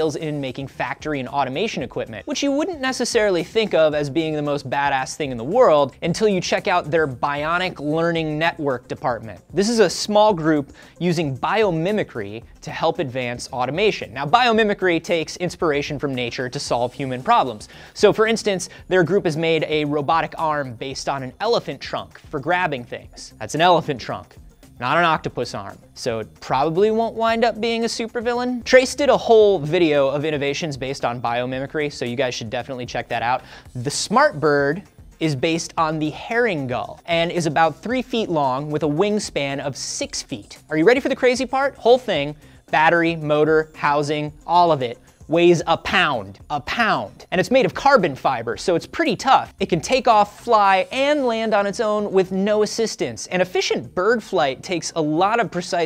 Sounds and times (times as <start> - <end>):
Music: 0.0 - 55.8
Speech: 0.0 - 55.8.